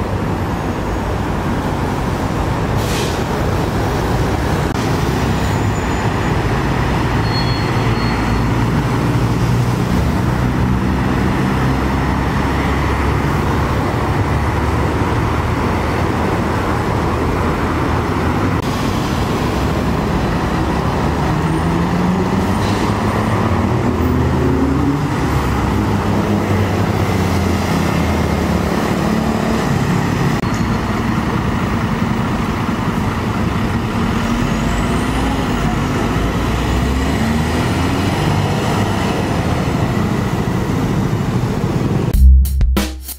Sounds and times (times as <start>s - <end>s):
Traffic noise, roadway noise: 0.0s - 42.2s
Outside, urban or manmade: 0.0s - 43.1s.